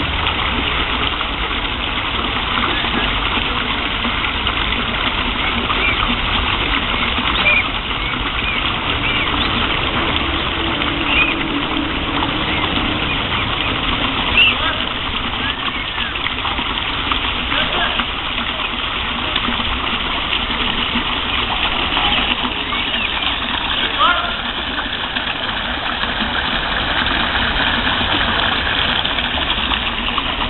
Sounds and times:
Goose: 0:05.4 - 0:06.1, 0:06.9 - 0:09.7
Bird: 0:05.4 - 0:06.2, 0:06.9 - 0:09.7, 0:11.1 - 0:11.4, 0:15.4 - 0:16.2, 0:22.0 - 0:23.4.

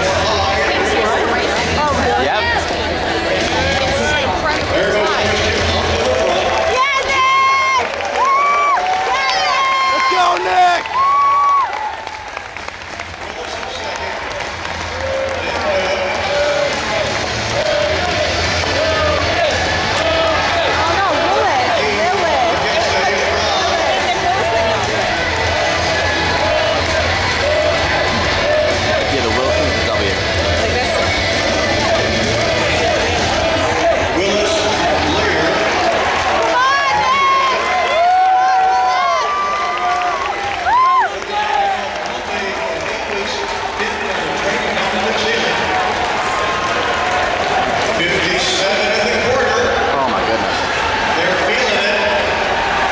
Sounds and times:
Run: 0:02.5 - 0:49.2.

